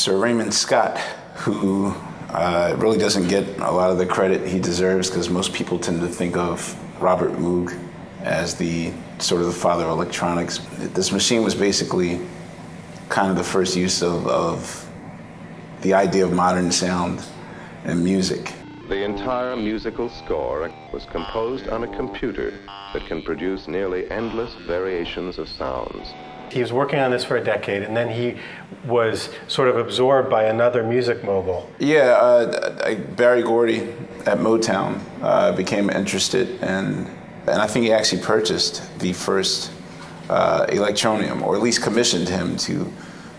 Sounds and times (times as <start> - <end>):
Speech: 0.0 - 12.4, 13.0 - 15.0, 15.8 - 43.0.